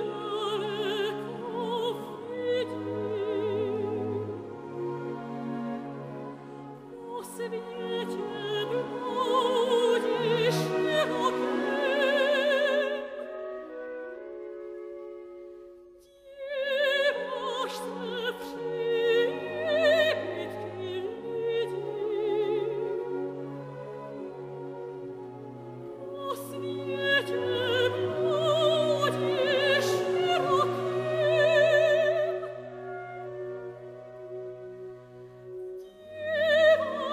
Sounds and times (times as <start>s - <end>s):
Opera: 0.0s - 37.1s.